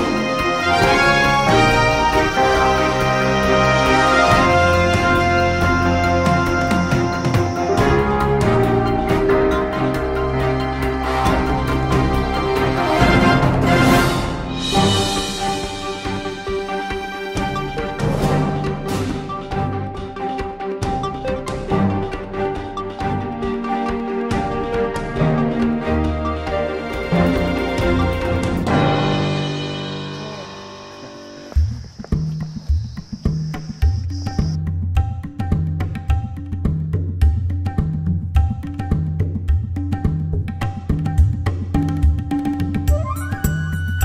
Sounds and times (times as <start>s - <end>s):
Theme music: 0.0s - 31.8s.